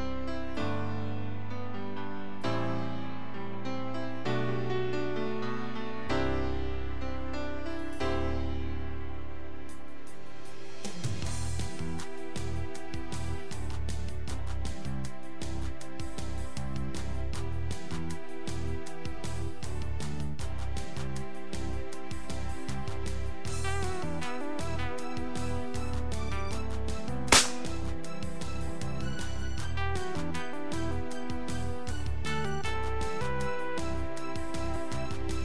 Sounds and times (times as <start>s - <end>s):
Music: 0.0s - 35.4s.